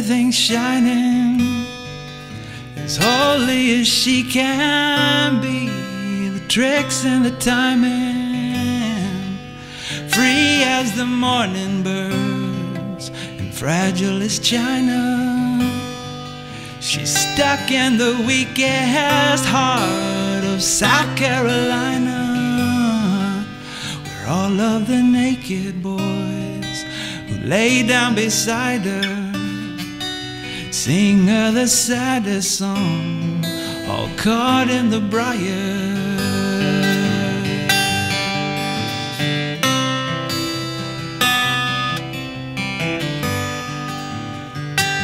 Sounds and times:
Electric guitar: 0.0 - 45.0
Strum: 1.2 - 32.1.

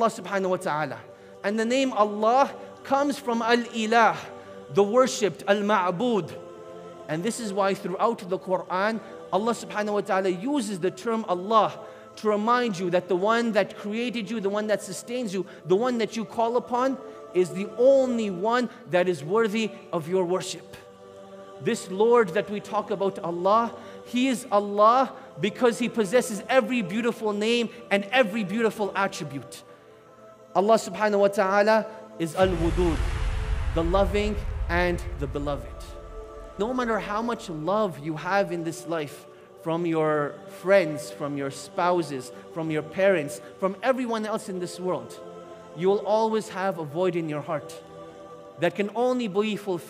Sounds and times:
Speech: 0.0 - 6.4, 7.1 - 20.8, 21.6 - 29.6, 30.6 - 36.0, 36.6 - 45.2, 45.8 - 47.8, 48.6 - 49.8
Music: 0.0 - 49.8.

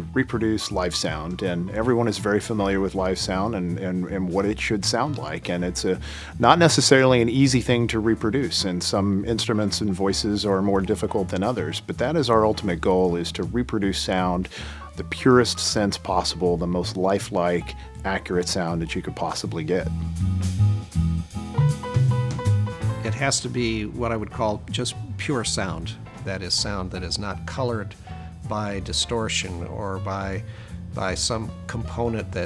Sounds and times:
Speech: 0.0 - 19.9, 23.0 - 32.4
Music: 0.0 - 32.4.

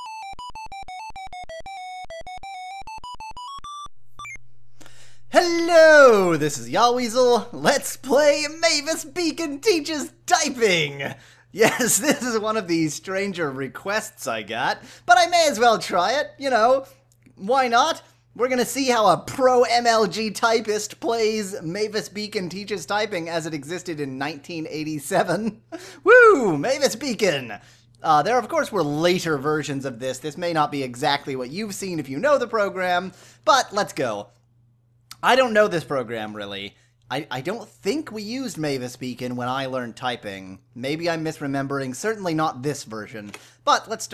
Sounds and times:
Speech: 5.4 - 34.3, 35.1 - 44.1.

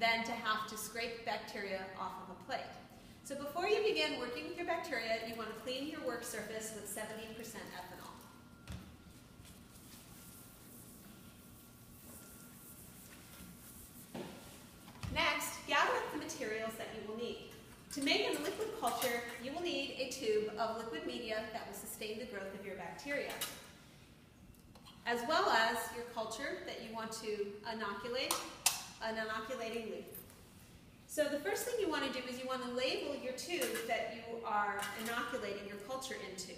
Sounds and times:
Speech: 0.0 - 8.3, 15.1 - 23.4, 25.1 - 28.4, 29.0 - 30.2, 31.1 - 36.5.

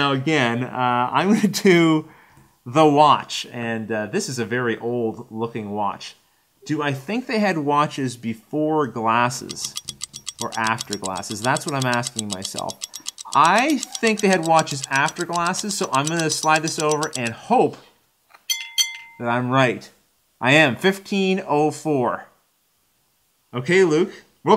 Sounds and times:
Speech: 0.0 - 2.1, 2.7 - 9.6, 13.4 - 17.8, 19.2 - 22.4, 23.5 - 24.5.

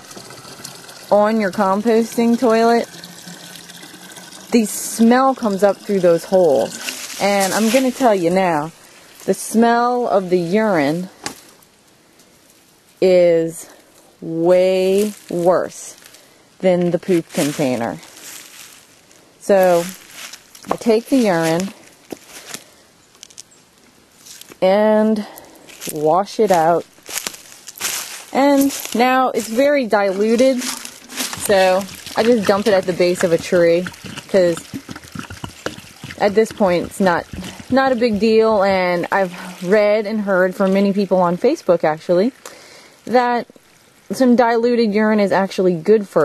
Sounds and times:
Water tap, faucet: 0.0 - 7.2, 30.6 - 38.0
Outside, urban or manmade: 0.0 - 46.2
Speech: 1.1 - 2.9, 4.6 - 8.7, 9.3 - 11.1, 13.0 - 16.0, 16.6 - 18.0, 19.4 - 20.0, 20.7 - 21.7, 24.6 - 25.3, 25.9 - 26.8, 28.4 - 30.8, 31.4 - 34.6, 36.2 - 42.4, 43.1 - 43.5, 44.1 - 46.2.

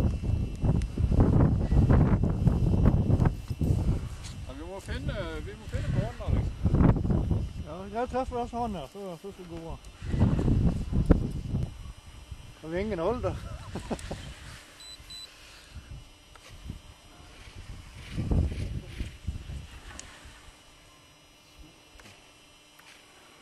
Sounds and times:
Outside, rural or natural: 0.0 - 23.4
Speech: 4.5 - 6.5, 7.6 - 9.8, 12.6 - 13.6.

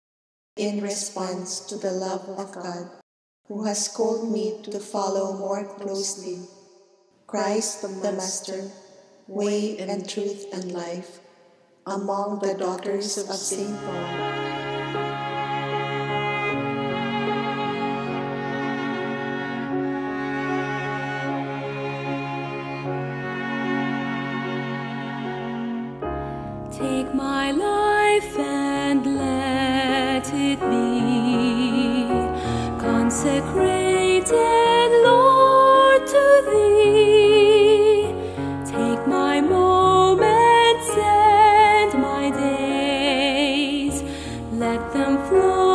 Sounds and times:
Music: 13.1 - 45.7.

